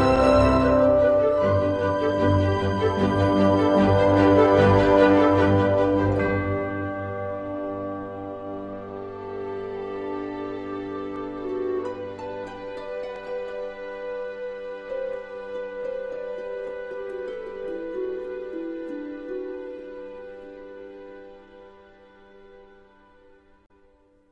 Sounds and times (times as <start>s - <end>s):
Music: 0.0s - 24.3s.